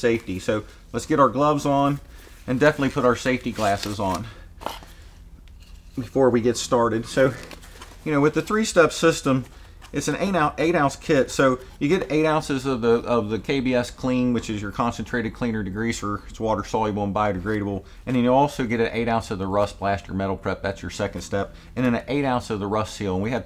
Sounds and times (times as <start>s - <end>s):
Speech: 0.0s - 4.4s, 6.0s - 23.4s.